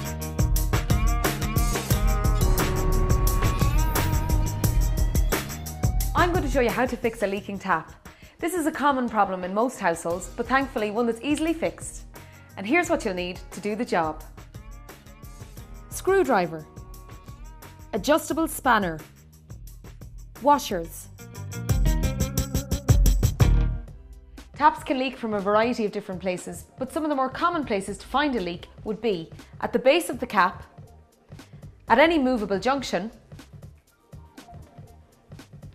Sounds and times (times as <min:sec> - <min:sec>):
Music: 0:00.0 - 0:35.7
Speech: 0:06.2 - 0:12.0, 0:12.6 - 0:14.2, 0:16.0 - 0:16.7, 0:18.0 - 0:19.0, 0:20.4 - 0:21.1, 0:24.6 - 0:30.7, 0:31.9 - 0:33.2.